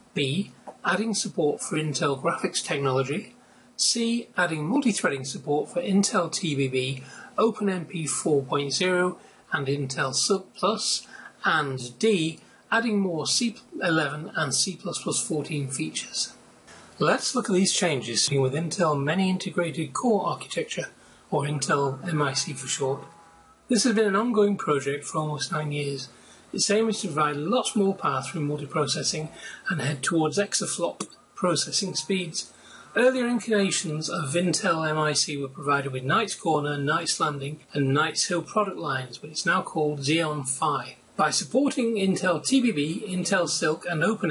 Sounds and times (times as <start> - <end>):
Speech: 0.0 - 16.4, 17.0 - 23.1, 23.7 - 44.3.